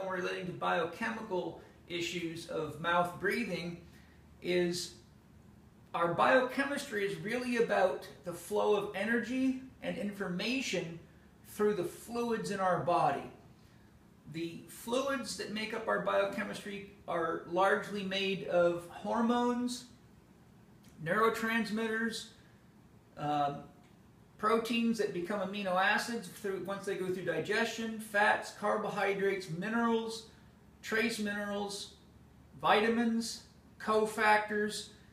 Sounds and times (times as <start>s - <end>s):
Speech: 0.0s - 3.8s, 4.4s - 5.0s, 5.9s - 13.4s, 14.3s - 20.0s, 21.0s - 22.4s, 23.2s - 23.7s, 24.4s - 32.0s, 32.6s - 35.0s.